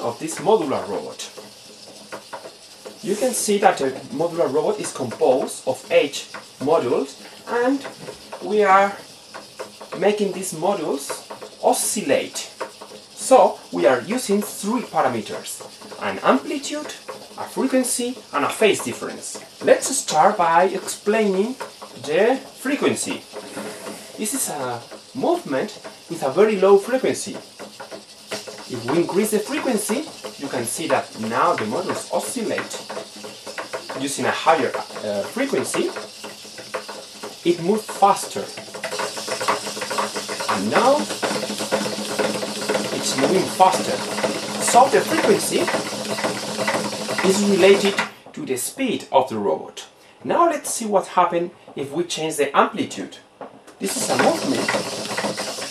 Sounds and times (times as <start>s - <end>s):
Speech: 0.0s - 1.4s, 3.0s - 9.0s, 10.0s - 12.6s, 13.2s - 23.3s, 24.2s - 27.4s, 28.7s - 32.9s, 34.0s - 36.0s, 37.4s - 38.6s, 40.5s - 41.2s, 42.8s - 45.9s, 47.2s - 53.2s, 53.8s - 54.8s.